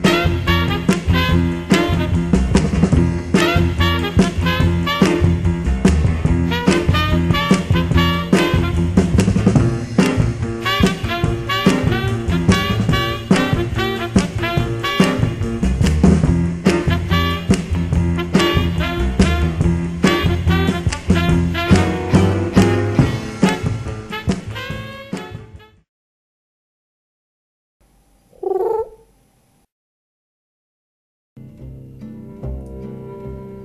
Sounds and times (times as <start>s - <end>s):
Music: 0.0s - 25.9s, 31.4s - 33.6s
Pigeon, dove: 28.4s - 29.0s.